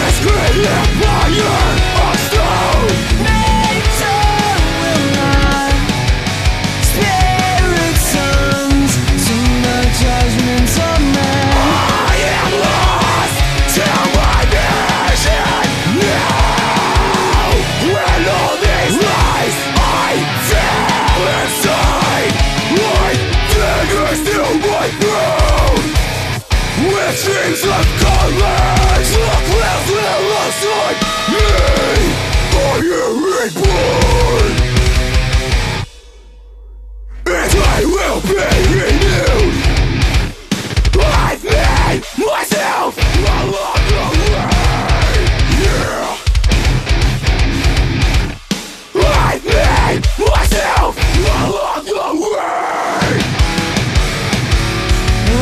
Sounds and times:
Music: 0.0s - 55.4s.

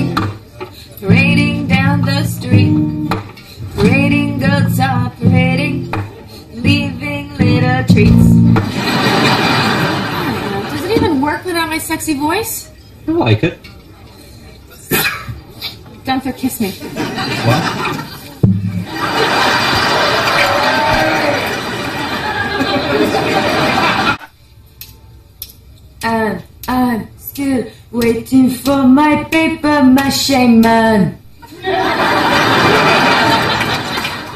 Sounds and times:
Music: 0.0s - 8.7s
Inside, large room or hall: 0.0s - 11.0s, 16.7s - 25.9s, 30.0s - 34.3s.

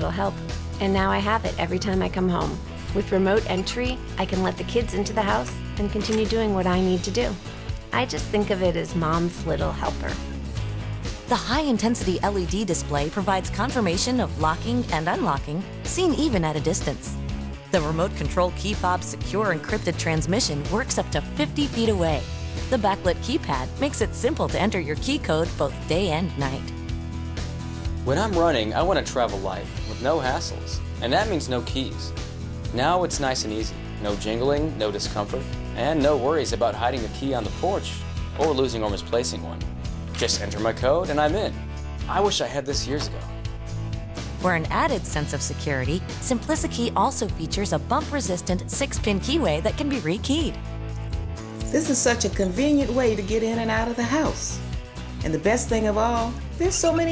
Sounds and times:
Music: 0.0s - 57.1s.

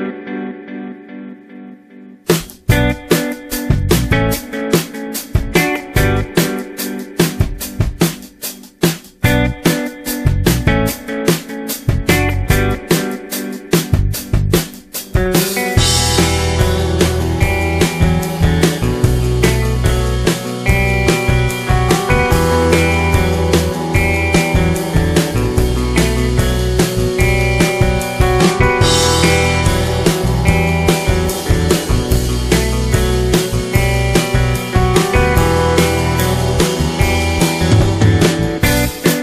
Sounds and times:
Music: 0.0s - 39.2s.

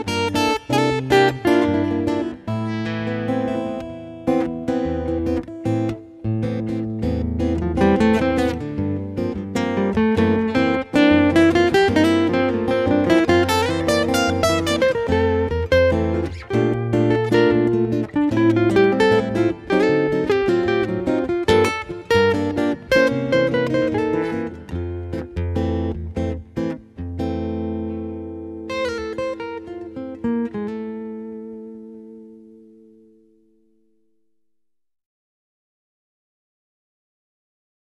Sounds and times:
Music: 0.0s - 34.4s.

